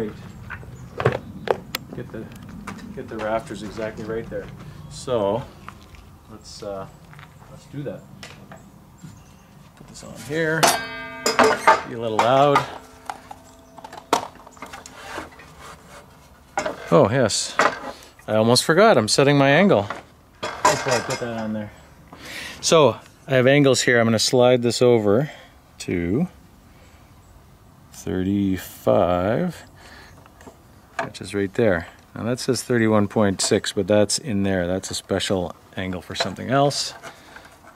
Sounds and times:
Outside, rural or natural: 0.0s - 37.7s
Speech: 1.9s - 2.3s, 3.0s - 5.5s, 6.3s - 8.1s, 9.8s - 10.8s, 11.7s - 12.8s, 16.9s - 17.7s, 18.3s - 20.0s, 20.6s - 21.8s, 22.6s - 26.4s, 28.0s - 29.7s, 31.0s - 37.0s.

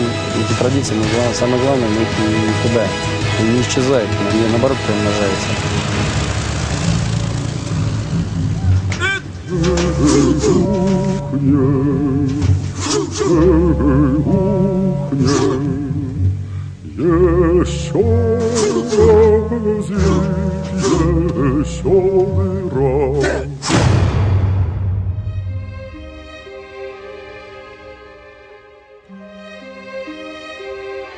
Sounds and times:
Music: 0.0s - 31.1s.

